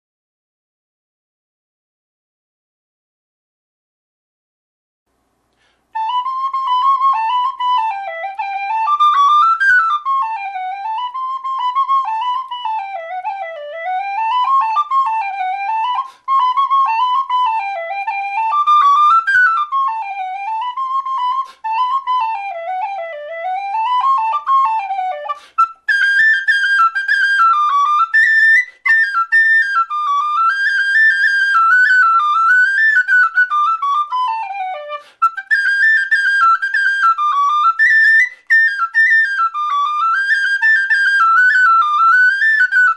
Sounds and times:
Flute: 5.8 - 42.9.

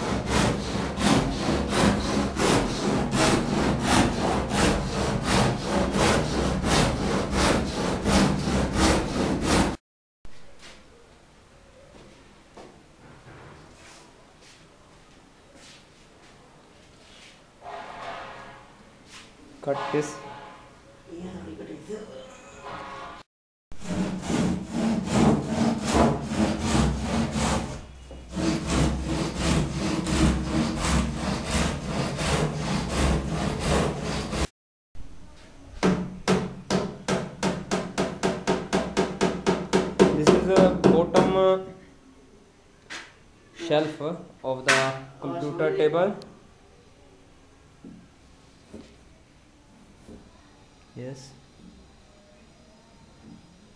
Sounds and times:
Speech: 19.6 - 20.3, 21.1 - 22.5, 40.1 - 41.8, 43.5 - 46.3, 50.3 - 51.4.

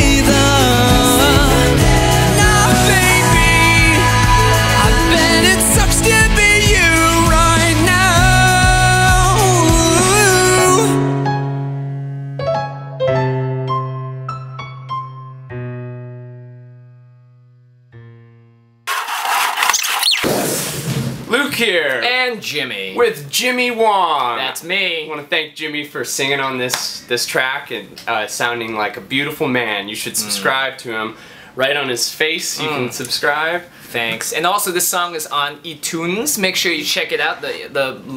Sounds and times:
Singing: 0.0 - 11.0
Music: 0.0 - 18.9.

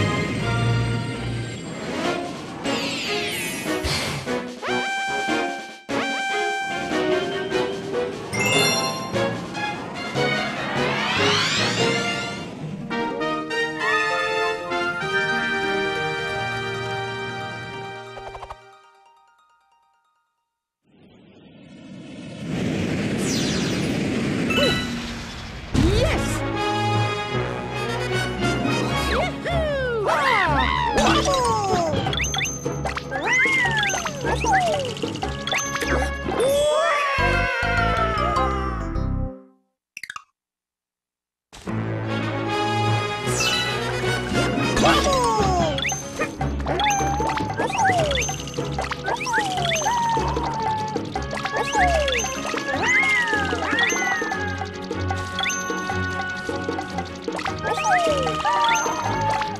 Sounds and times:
Music: 0.0 - 20.5, 26.0 - 36.6, 37.2 - 39.7, 41.6 - 59.5
Speech: 25.8 - 26.4, 29.1 - 32.1, 44.8 - 45.8, 57.6 - 59.2.

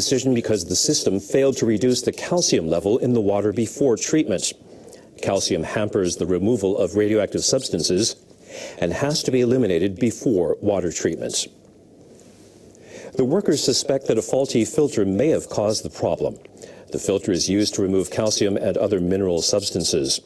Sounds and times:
Speech: 0.0 - 4.6, 5.2 - 8.2, 8.8 - 11.6, 13.2 - 20.2.

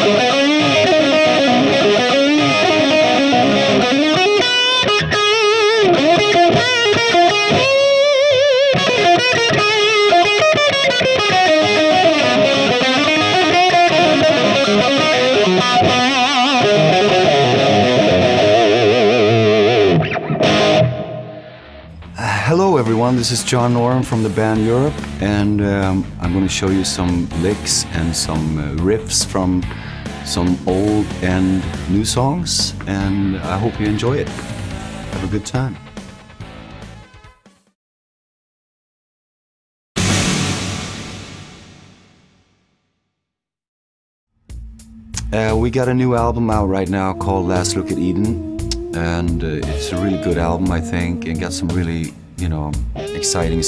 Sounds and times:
Electric guitar: 0.0 - 22.2, 23.0 - 37.2, 44.5 - 53.6.

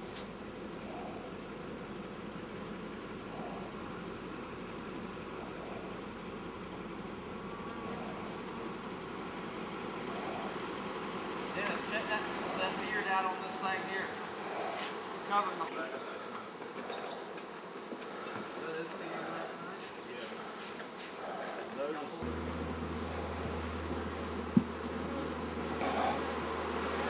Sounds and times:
Bee, wasp, etc.: 0.0 - 27.1
Fly, housefly: 0.0 - 27.1.

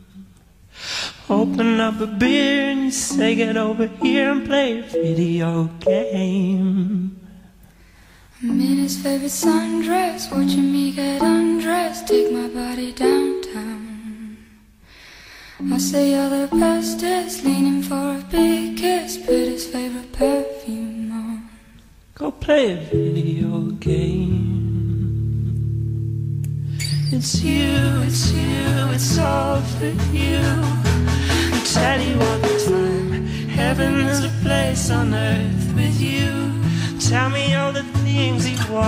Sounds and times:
Music: 1.3 - 6.4, 8.4 - 14.2, 15.6 - 21.1, 22.9 - 38.8
Speech: 22.2 - 24.4.

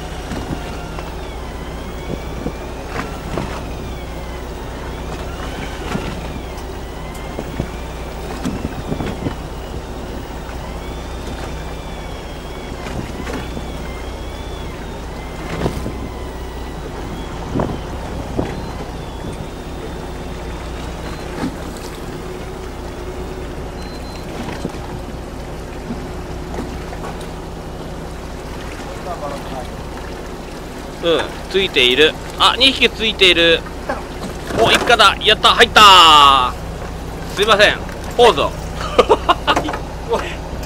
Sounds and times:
Sailboat, sailing ship: 0.0 - 40.6
Speech: 28.9 - 29.8, 31.0 - 33.6, 34.5 - 36.6, 37.3 - 38.6, 40.1 - 40.4.

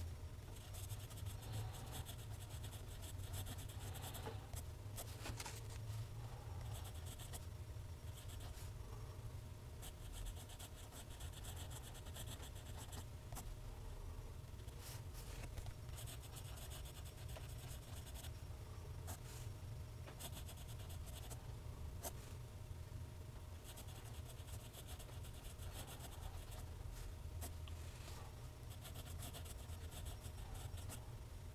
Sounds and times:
Writing: 0.6 - 5.1, 16.0 - 18.3, 23.7 - 26.6, 28.7 - 31.0.

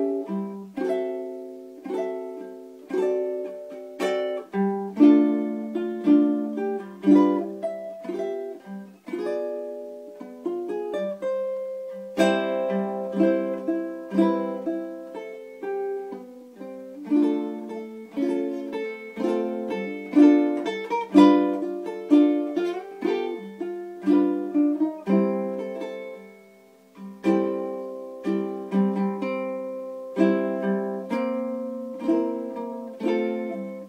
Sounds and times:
Ukulele: 0.0 - 33.8.

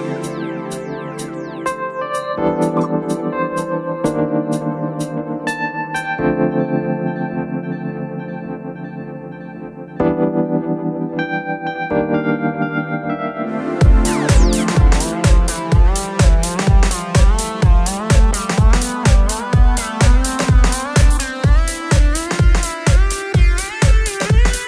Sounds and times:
Electronic dance music: 0.0 - 6.2, 13.5 - 24.6
Synthesizer: 0.0 - 24.6.

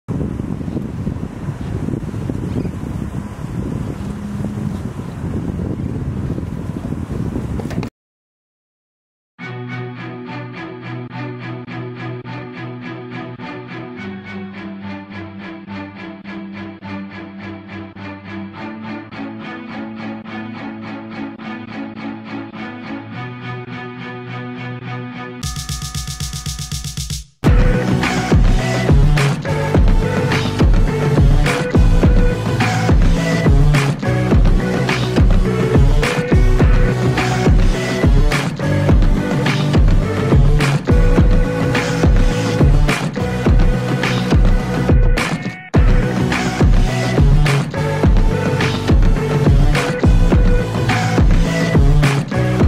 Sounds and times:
Wind: 0.1 - 7.9
Sailboat, sailing ship: 0.2 - 7.9
Music: 9.4 - 52.6.

